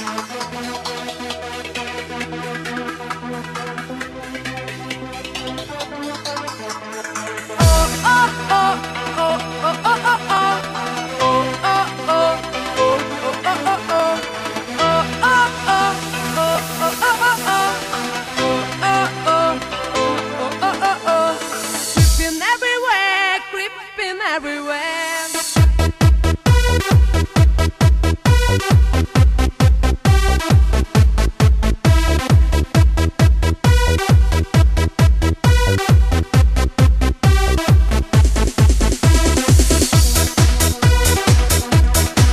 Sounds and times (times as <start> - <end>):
Music: 0.0 - 42.3.